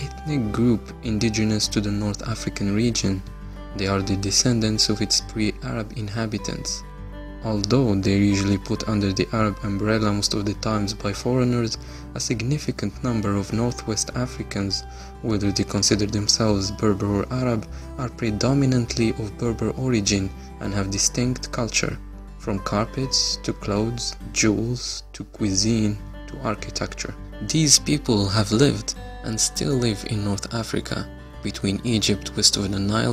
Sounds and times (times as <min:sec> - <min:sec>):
Speech: 0:00.0 - 0:06.8, 0:07.4 - 0:33.1
Music: 0:00.0 - 0:33.1.